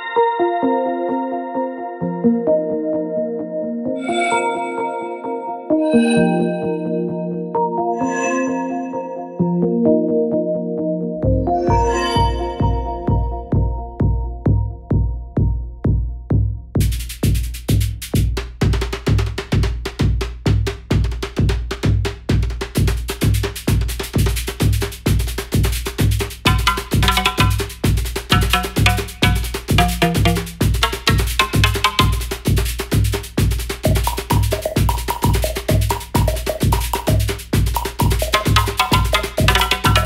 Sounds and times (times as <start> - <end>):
Sampler: 28.3 - 32.2.